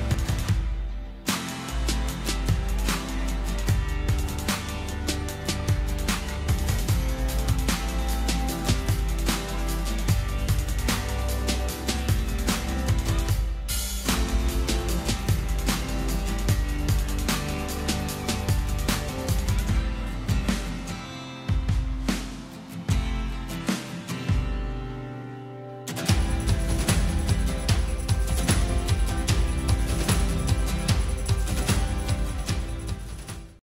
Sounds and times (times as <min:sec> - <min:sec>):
Music: 0:00.0 - 0:33.6.